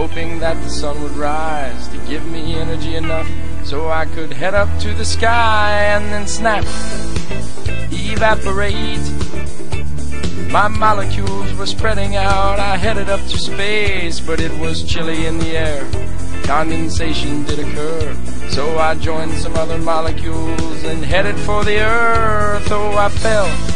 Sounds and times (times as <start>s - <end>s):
Music: 0.0s - 23.7s.